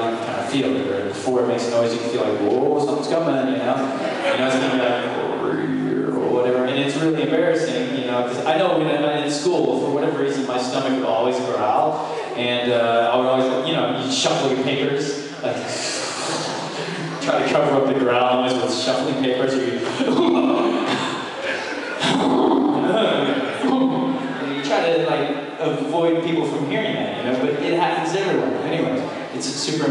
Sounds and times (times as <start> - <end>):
Speech: 0.0 - 29.9.